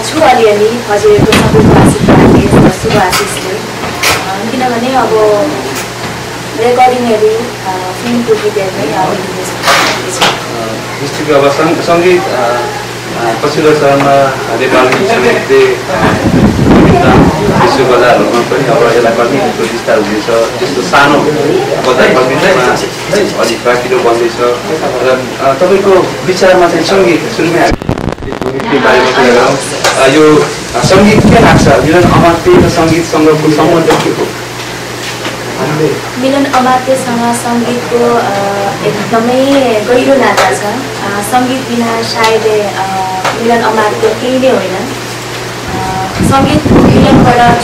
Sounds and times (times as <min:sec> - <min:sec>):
Conversation: 0:00.0 - 0:47.6.